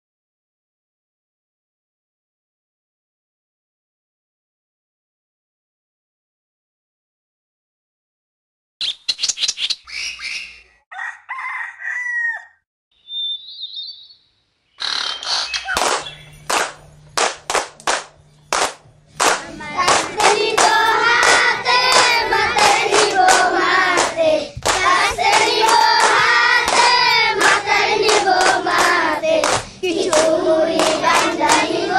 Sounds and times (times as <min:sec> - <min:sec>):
Chirp, tweet: 0:13.0 - 0:16.5.